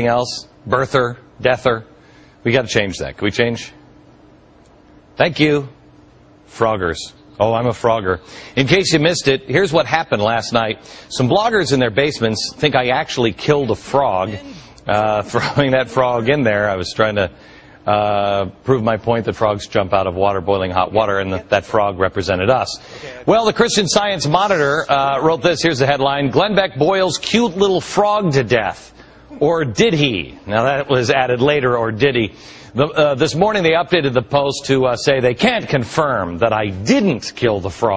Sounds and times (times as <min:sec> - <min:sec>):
Speech: 0:05.2 - 0:05.8, 0:17.9 - 0:37.9.